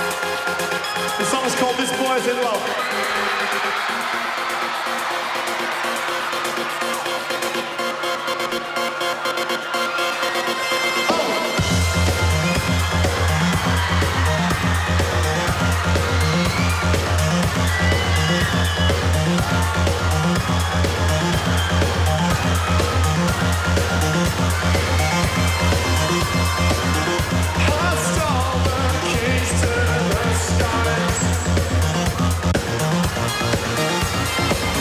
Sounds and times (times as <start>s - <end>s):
Music: 0.0s - 34.8s.